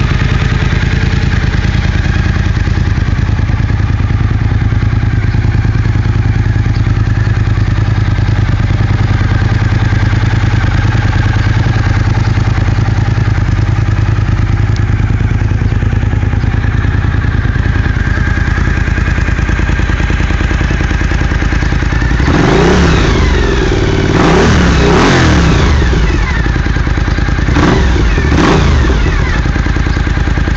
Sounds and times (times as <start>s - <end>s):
Motorcycle: 0.0s - 30.5s
Outside, urban or manmade: 0.0s - 30.5s.